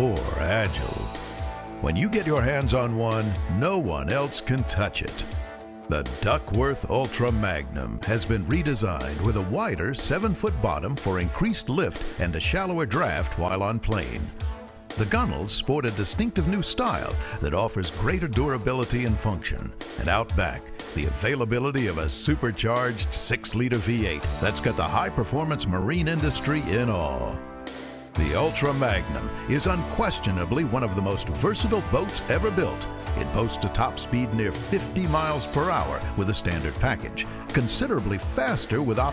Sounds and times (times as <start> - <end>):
Speech: 0.0 - 1.1, 1.8 - 5.3, 5.9 - 14.3, 15.0 - 27.4, 28.2 - 39.1
Music: 0.0 - 39.1.